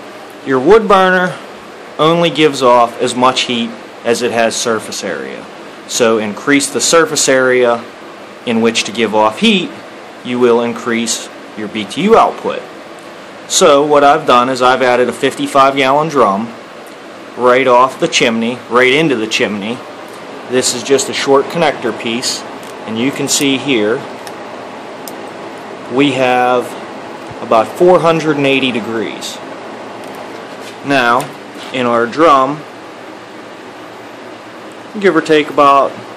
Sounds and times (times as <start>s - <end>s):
Speech: 0.4s - 1.4s, 2.0s - 7.9s, 8.5s - 12.7s, 13.5s - 16.6s, 17.4s - 19.8s, 20.5s - 24.1s, 25.9s - 26.8s, 27.4s - 29.4s, 30.8s - 32.7s, 34.9s - 36.0s.